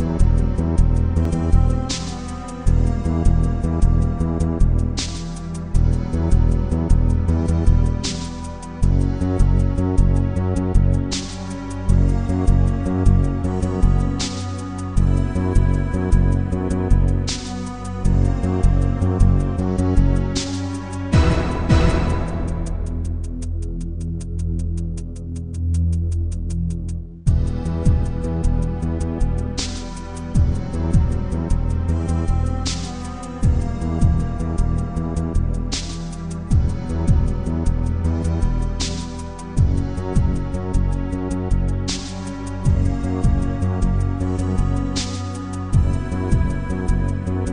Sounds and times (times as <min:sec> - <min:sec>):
Music: 0:00.0 - 0:47.5.